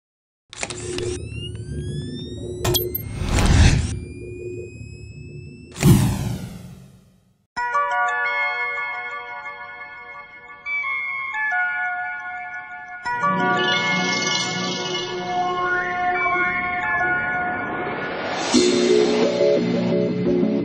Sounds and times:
Music: 0:07.6 - 0:20.6.

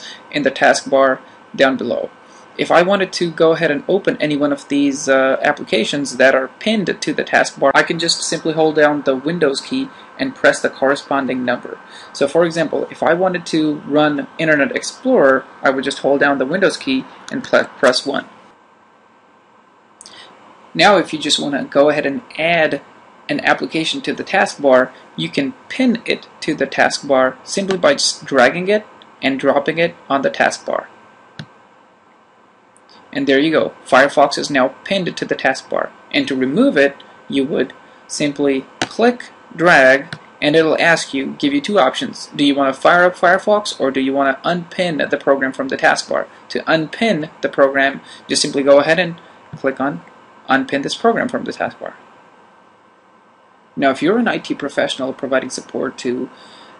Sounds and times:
Narration, monologue: 0:00.0 - 0:56.7.

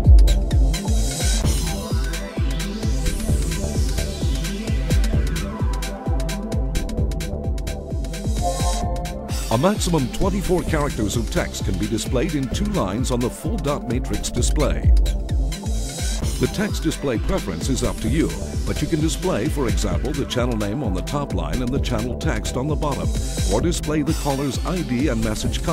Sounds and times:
Music: 0:00.0 - 0:25.7
Speech: 0:09.5 - 0:15.0, 0:16.4 - 0:25.7.

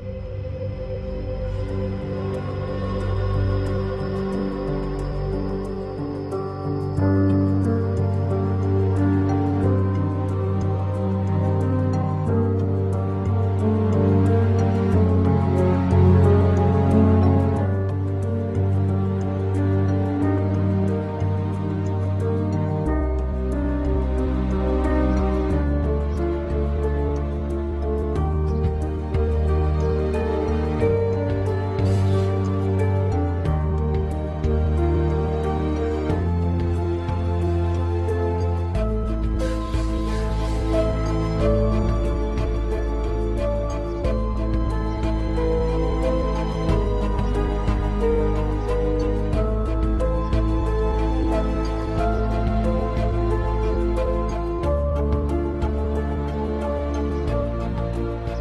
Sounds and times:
Music: 0:00.0 - 0:58.4.

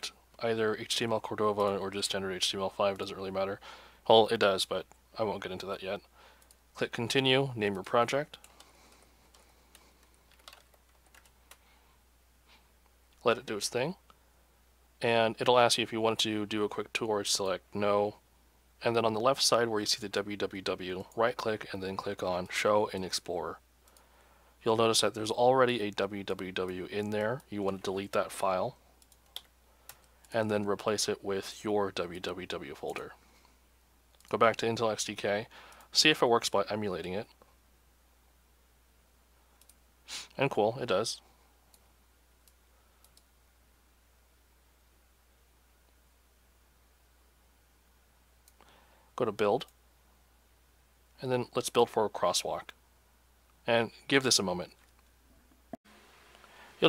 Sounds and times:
Speech: 0:00.0 - 0:06.1, 0:06.8 - 0:08.4, 0:13.2 - 0:14.0, 0:15.0 - 0:18.2, 0:18.8 - 0:23.6, 0:24.6 - 0:28.8, 0:30.3 - 0:33.2, 0:34.3 - 0:37.4, 0:40.4 - 0:41.2, 0:49.2 - 0:49.7, 0:51.2 - 0:52.8, 0:53.6 - 0:54.8.

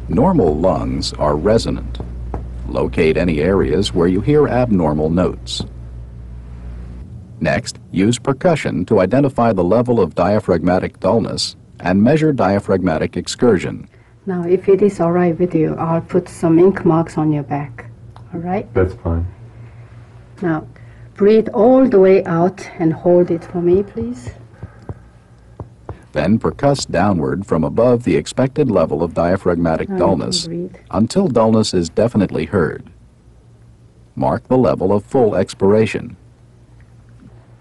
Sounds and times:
Speech: 0:07.4 - 0:14.6, 0:18.8 - 0:19.3, 0:26.1 - 0:32.9, 0:34.2 - 0:36.2.

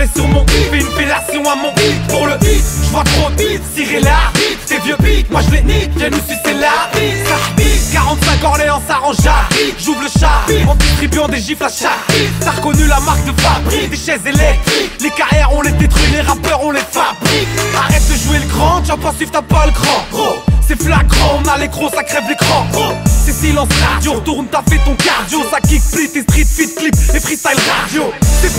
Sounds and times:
Music: 0:00.0 - 0:28.5.

